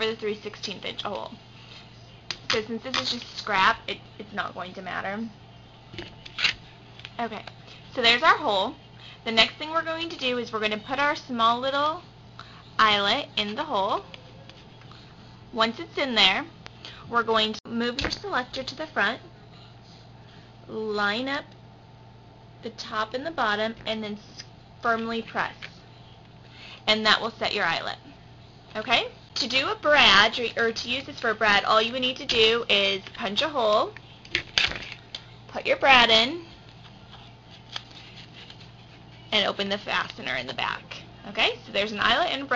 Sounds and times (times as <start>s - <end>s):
Speech: 0.0s - 1.4s, 2.5s - 5.4s, 7.2s - 12.0s, 12.8s - 14.0s, 15.6s - 16.5s, 17.1s - 19.3s, 20.7s - 21.5s, 22.6s - 25.7s, 26.9s - 28.1s, 28.7s - 34.0s, 35.5s - 36.5s, 39.3s - 42.5s.